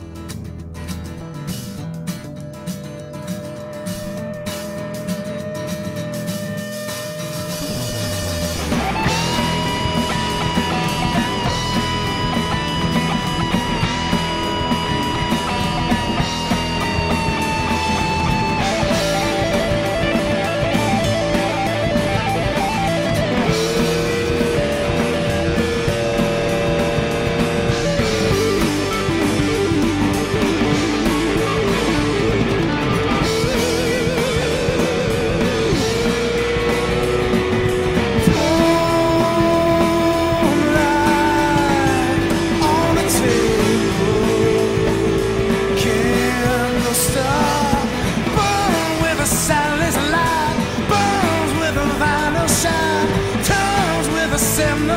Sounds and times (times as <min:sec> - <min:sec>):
Music: 0:00.0 - 0:54.9.